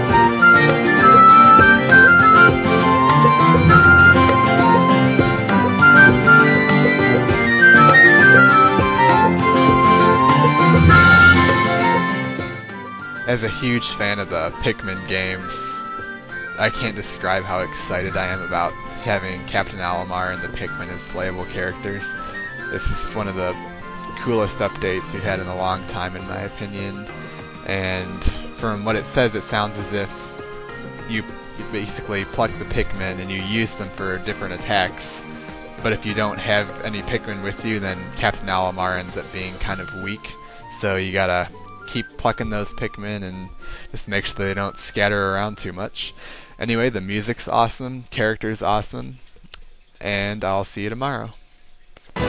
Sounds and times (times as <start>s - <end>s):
Music: 0.0s - 50.2s, 51.3s - 52.2s
Speech: 13.3s - 16.0s, 16.6s - 30.3s, 31.0s - 49.2s, 50.0s - 51.4s.